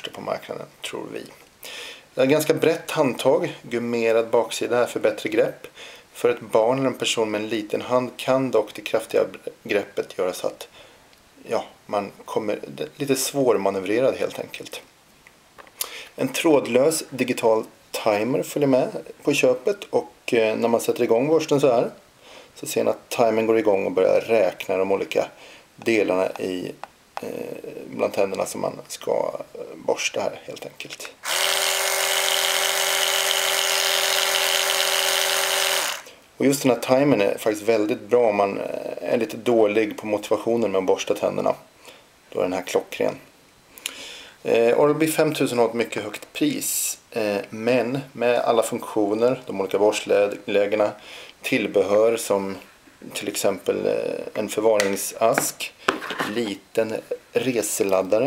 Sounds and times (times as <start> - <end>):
Speech: 0.0 - 1.4, 2.2 - 10.7, 11.4 - 14.9, 16.2 - 22.0, 22.6 - 31.2, 36.4 - 41.7, 42.3 - 43.3, 44.4 - 58.2.